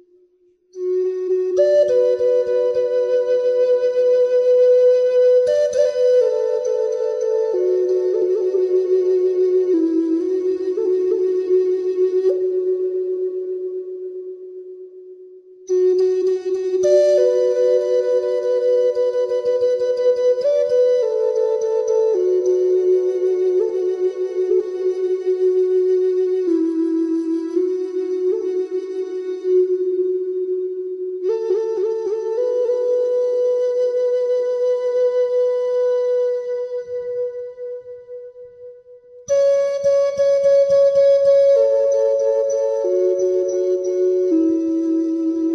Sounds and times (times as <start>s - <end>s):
Flute: 0.0s - 45.5s.